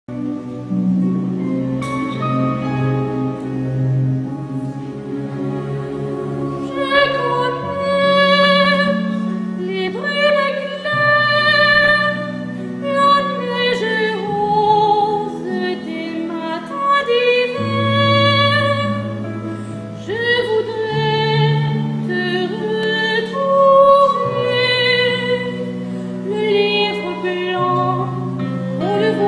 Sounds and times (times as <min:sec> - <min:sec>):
Opera: 0:00.1 - 0:29.2.